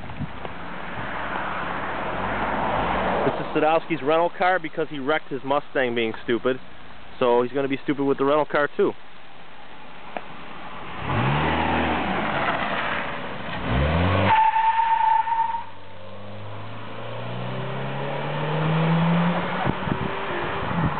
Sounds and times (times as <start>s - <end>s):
Car passing by: 0.8s - 3.6s, 10.9s - 14.4s, 16.1s - 20.9s.